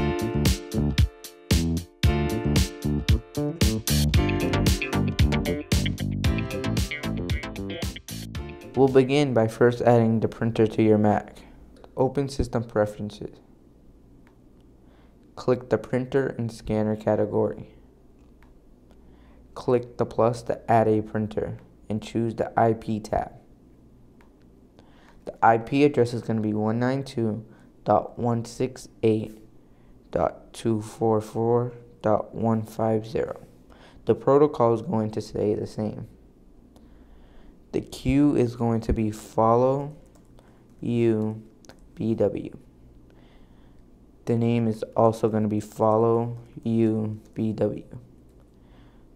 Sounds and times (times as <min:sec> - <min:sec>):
Speech: 0:08.7 - 0:13.4, 0:15.4 - 0:17.8, 0:19.6 - 0:23.5, 0:25.2 - 0:29.5, 0:30.1 - 0:36.2, 0:37.7 - 0:40.0, 0:40.8 - 0:42.6, 0:44.2 - 0:48.1.